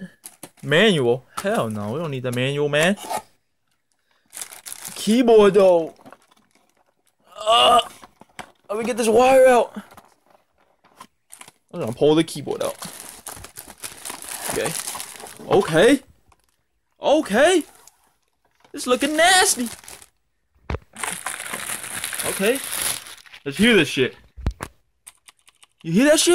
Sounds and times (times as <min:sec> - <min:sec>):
Speech: 0:00.0 - 0:03.0, 0:05.0 - 0:06.0, 0:08.7 - 0:09.8, 0:11.7 - 0:12.8, 0:17.0 - 0:17.7, 0:18.7 - 0:19.7, 0:23.4 - 0:24.2, 0:25.8 - 0:26.3
Crackle: 0:05.9 - 0:07.3, 0:16.2 - 0:16.8, 0:19.4 - 0:23.6.